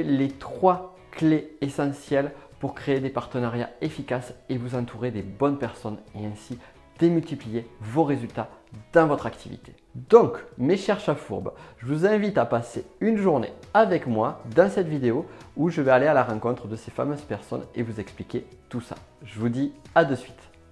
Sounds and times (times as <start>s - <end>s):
Speech: 0.0s - 20.5s.